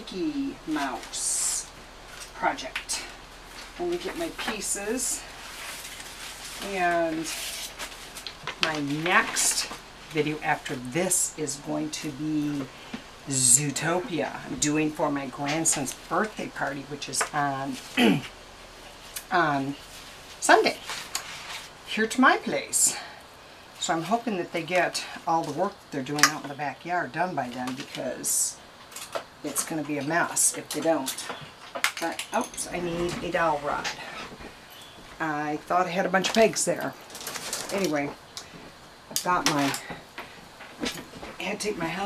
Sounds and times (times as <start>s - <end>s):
Speech: 0.0s - 1.7s, 2.4s - 3.1s, 3.8s - 5.3s, 6.6s - 7.4s, 8.6s - 12.7s, 13.3s - 18.3s, 19.2s - 19.8s, 20.4s - 20.8s, 21.9s - 23.2s, 23.8s - 28.6s, 29.4s - 31.4s, 32.0s - 34.2s, 35.2s - 37.0s, 37.7s - 38.2s, 39.2s - 39.9s, 41.4s - 42.0s.